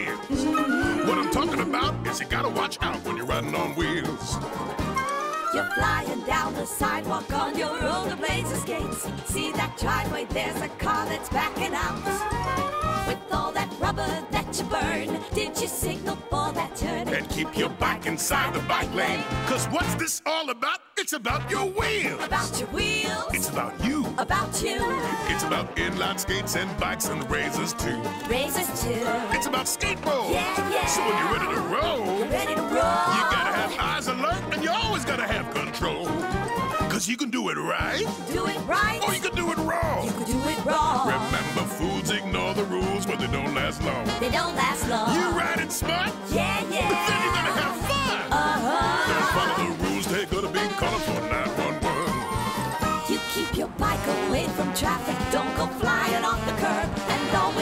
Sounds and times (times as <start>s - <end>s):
Music: 0.0s - 20.3s, 21.2s - 57.6s
Speech: 0.9s - 4.4s, 17.2s - 22.4s, 23.4s - 24.2s, 24.8s - 28.1s, 29.3s - 32.2s, 33.0s - 36.2s, 36.9s - 44.1s, 45.1s - 46.1s, 46.9s - 48.4s, 49.1s - 52.2s.